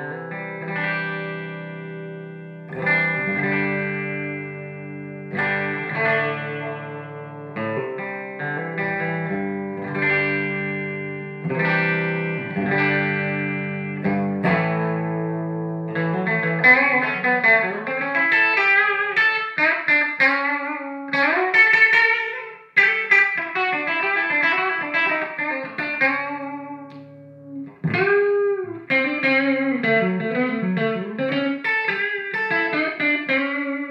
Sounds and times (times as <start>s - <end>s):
Guitar: 0.0s - 33.9s
Inside, small room: 0.0s - 33.9s.